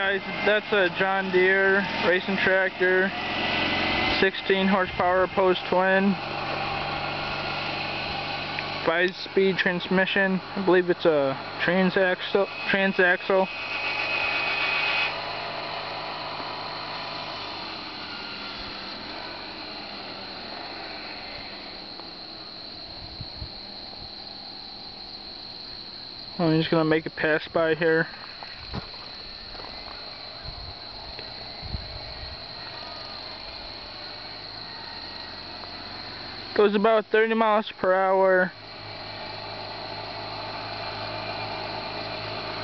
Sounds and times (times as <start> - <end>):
Speech: 0.0 - 3.1, 4.2 - 6.2, 8.9 - 13.5, 26.4 - 28.1, 36.6 - 38.6
Vehicle: 0.0 - 42.6.